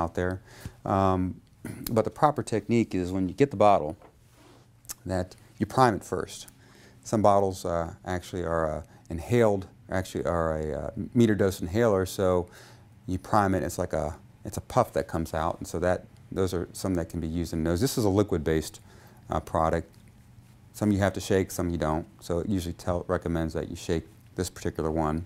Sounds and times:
Speech: 0.0s - 4.0s, 4.9s - 20.0s, 20.7s - 25.2s.

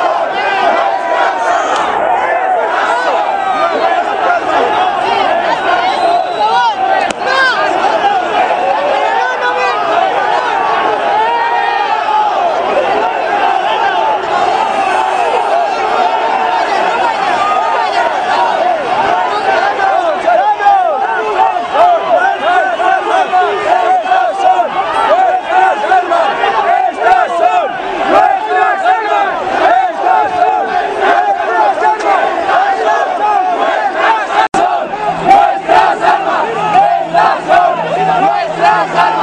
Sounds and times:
Speech: 0.0s - 39.2s.

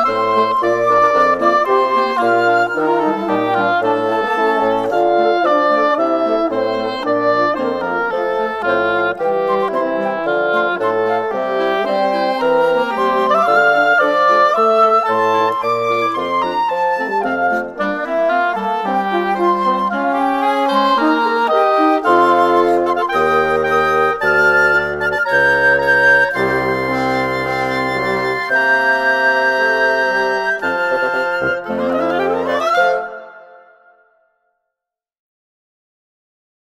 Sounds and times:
Music: 0.0s - 35.0s.

